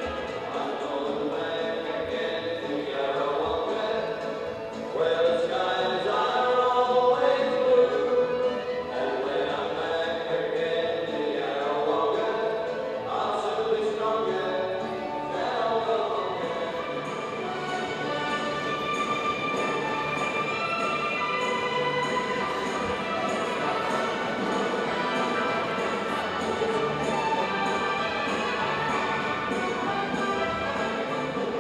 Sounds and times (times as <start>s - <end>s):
Music: 0.0s - 31.6s.